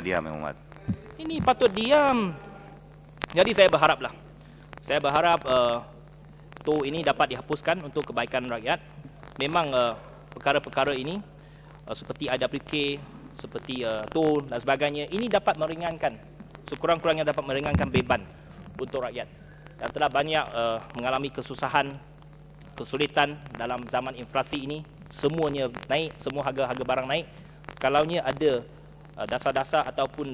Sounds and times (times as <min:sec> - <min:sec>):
Male speech, man speaking: 0:00.0 - 0:02.5, 0:03.3 - 0:04.2, 0:04.9 - 0:05.9, 0:06.6 - 0:08.8, 0:09.4 - 0:11.3, 0:11.9 - 0:22.0, 0:22.8 - 0:30.3
Narration, monologue: 0:00.0 - 0:30.3.